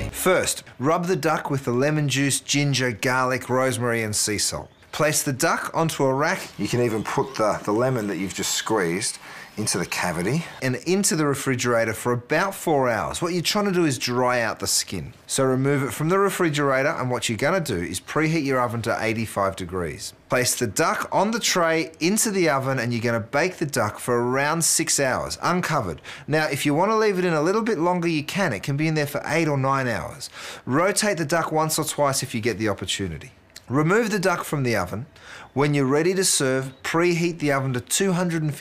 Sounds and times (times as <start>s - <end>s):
Speech: 0.0s - 38.6s.